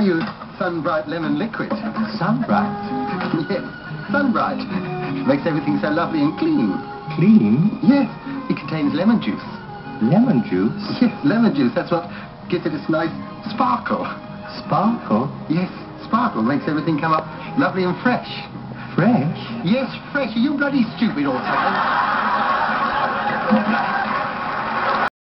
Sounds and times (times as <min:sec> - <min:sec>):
Speech: 0:00.0 - 0:21.8
Music: 0:00.0 - 0:25.1.